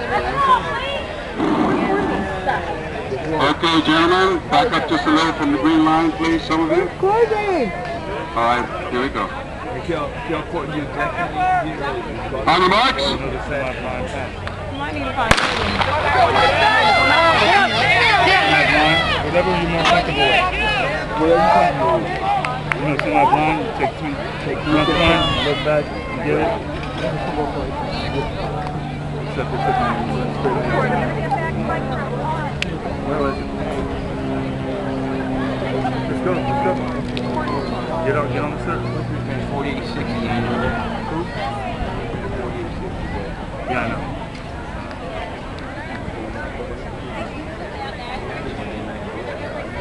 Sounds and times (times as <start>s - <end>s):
Outside, urban or manmade: 0.0s - 49.8s.